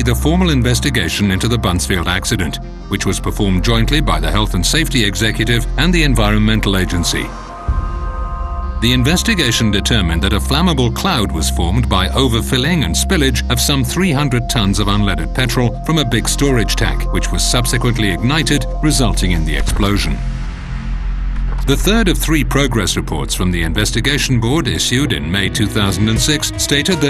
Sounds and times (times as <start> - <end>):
Speech: 0.0 - 7.4, 8.8 - 20.2, 21.6 - 27.0
Music: 0.0 - 27.0.